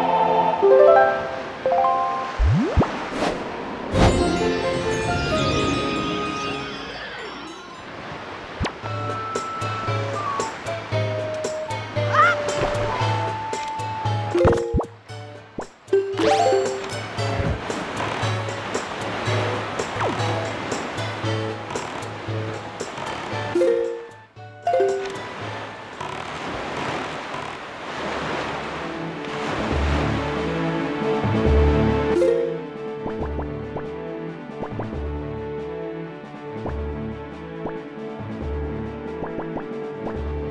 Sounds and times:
Music: 0.0s - 2.4s, 4.0s - 8.0s, 8.8s - 26.2s, 28.7s - 40.5s.

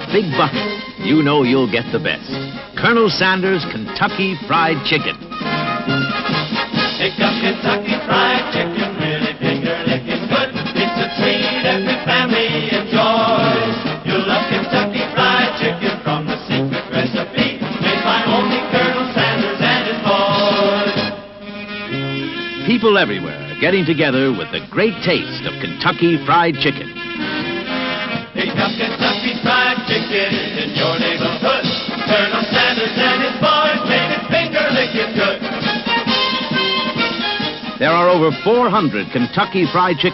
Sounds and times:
Speech: 0.0s - 5.2s, 22.7s - 26.9s, 37.8s - 40.1s
Music: 0.0s - 40.1s.

